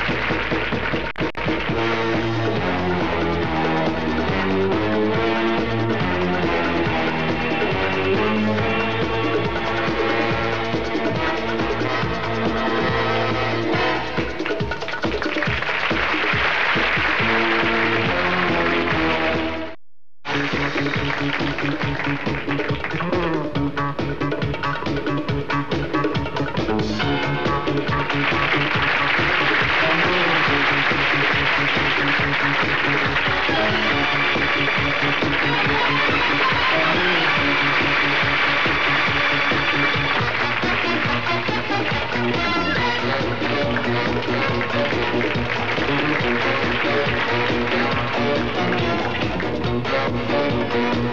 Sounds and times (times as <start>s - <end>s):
Music: 0.0s - 51.1s.